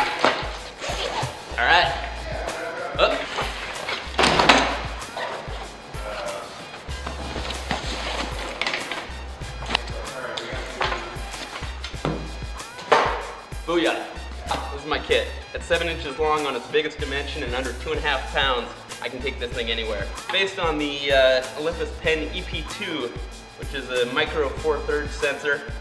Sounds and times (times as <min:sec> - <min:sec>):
Music: 0:00.0 - 0:25.8.